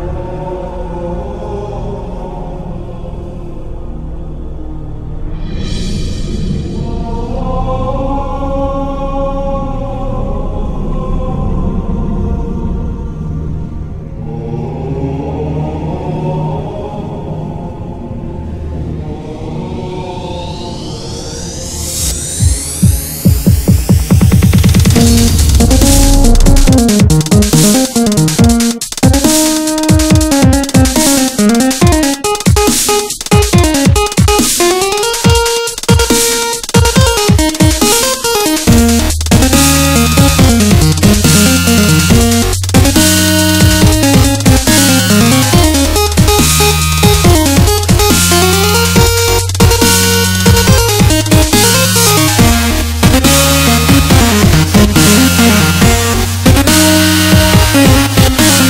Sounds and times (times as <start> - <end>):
Dubstep: 20.2 - 58.6.